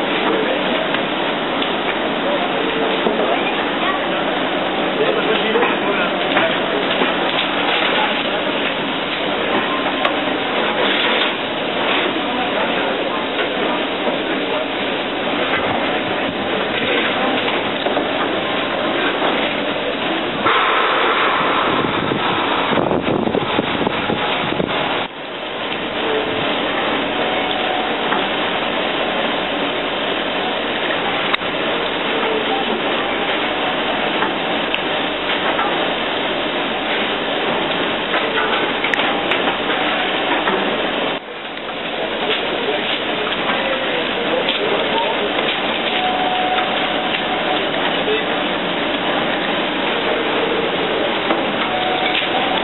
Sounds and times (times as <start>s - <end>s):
Railroad car, train wagon: 0.0s - 52.6s
Train: 0.0s - 52.6s.